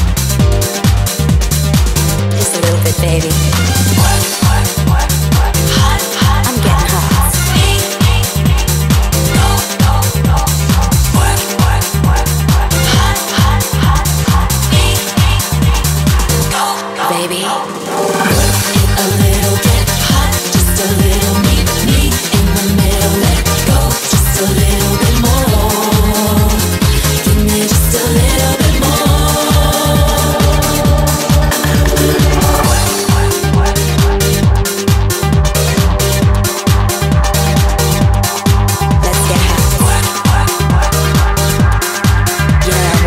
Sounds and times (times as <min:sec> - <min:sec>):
Music: 0:00.0 - 0:43.0
Speech: 0:02.4 - 0:03.7, 0:05.7 - 0:07.8, 0:39.0 - 0:40.5, 0:42.6 - 0:43.0.